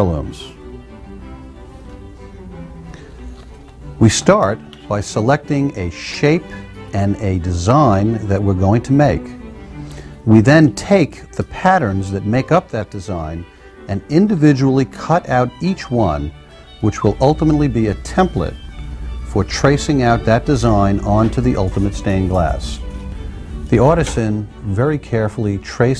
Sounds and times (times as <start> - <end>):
Speech: 0.0 - 0.6, 4.0 - 9.4, 10.3 - 18.6, 19.3 - 22.8, 23.7 - 25.9
Music: 0.0 - 25.9.